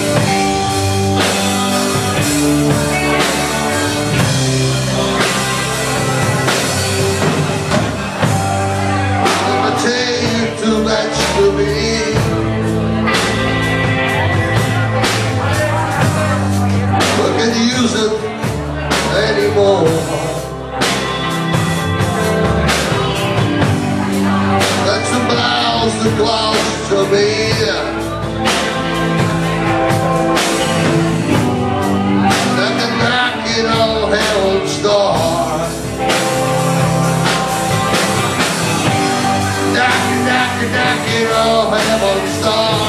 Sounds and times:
Music: 0.0 - 42.8
Speech: 7.6 - 20.8, 21.6 - 30.5, 31.4 - 42.8.

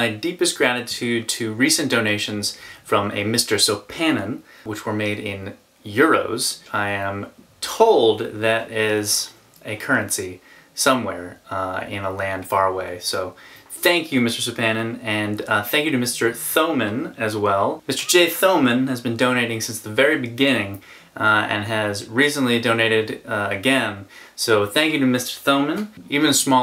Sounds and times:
Speech: 0.0 - 26.6.

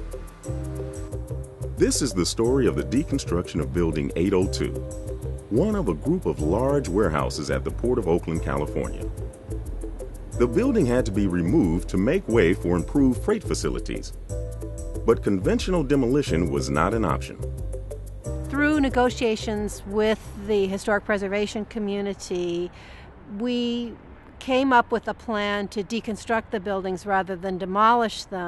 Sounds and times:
Music: 0.0 - 21.5
Speech: 1.8 - 4.8, 5.5 - 9.0, 10.4 - 14.1, 15.1 - 17.4, 18.5 - 22.7, 23.3 - 28.4.

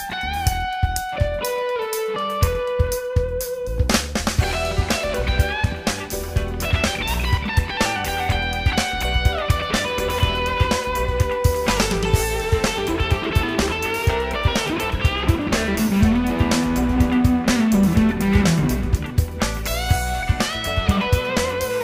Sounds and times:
Electric guitar: 0.0 - 21.8.

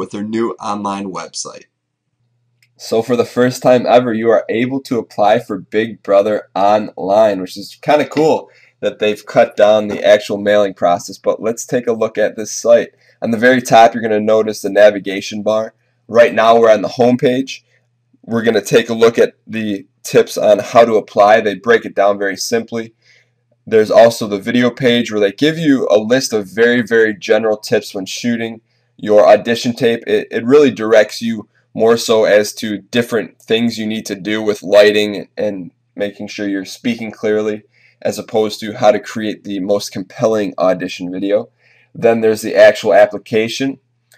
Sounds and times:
Speech: 0.0 - 1.6, 2.7 - 17.6, 18.3 - 23.0, 23.7 - 44.1.

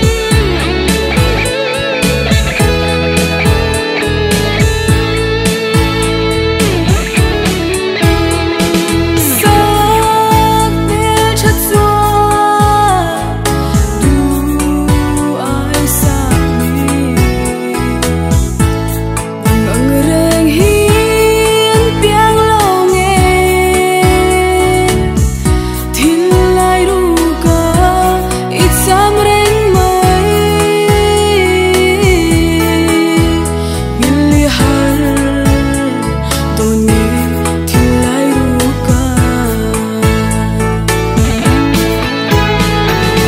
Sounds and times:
Music: 0.0 - 43.2.

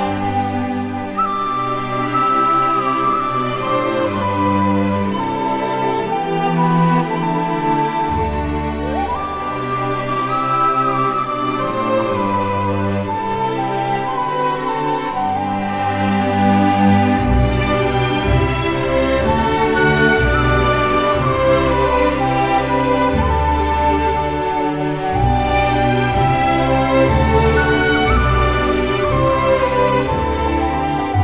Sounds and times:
Music: 0.0 - 31.2.

